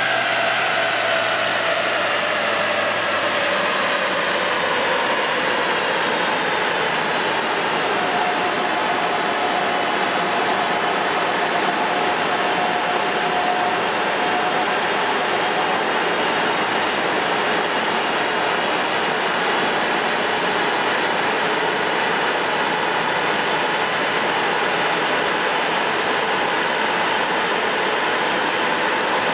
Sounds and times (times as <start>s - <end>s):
Vehicle: 0.0s - 29.3s.